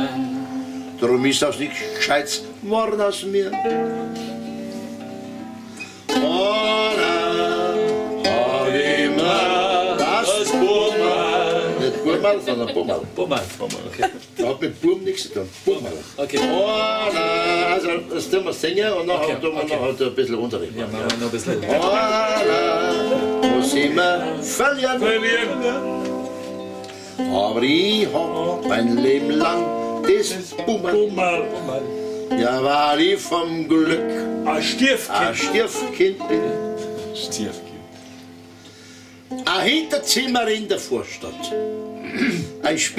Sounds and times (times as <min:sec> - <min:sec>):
Zither: 0:00.0 - 0:12.9, 0:15.5 - 0:20.3, 0:21.2 - 0:42.9
Speech: 0:01.0 - 0:03.6, 0:11.8 - 0:16.5, 0:18.1 - 0:21.7, 0:32.5 - 0:37.8, 0:39.5 - 0:41.6, 0:42.6 - 0:42.9.